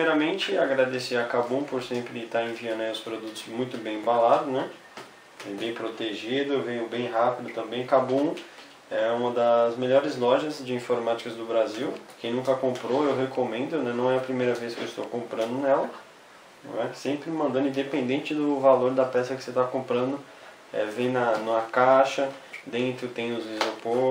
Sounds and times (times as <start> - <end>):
Speech: 0.0 - 4.8, 5.4 - 16.0, 16.6 - 24.1.